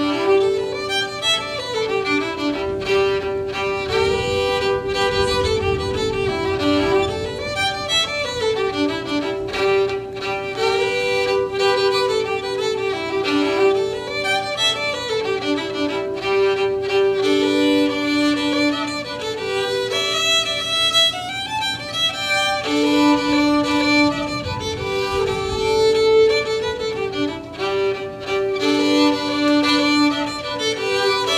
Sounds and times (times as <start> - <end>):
Violin, fiddle: 0.0 - 31.3.